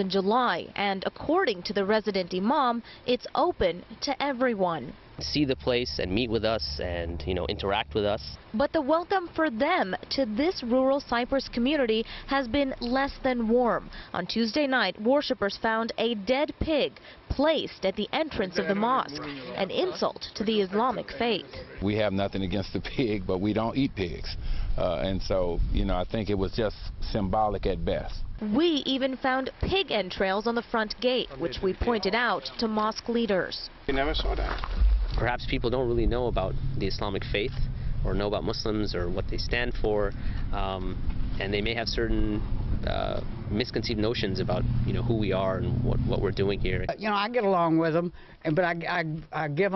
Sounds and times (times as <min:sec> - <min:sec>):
Speech: 0:00.0 - 0:34.6, 0:35.2 - 0:49.7.